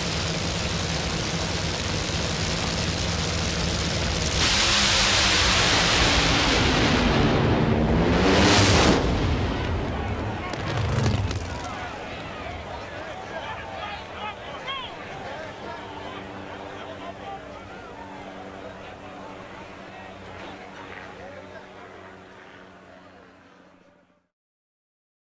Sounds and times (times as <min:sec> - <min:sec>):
Speech: 0:11.4 - 0:24.3.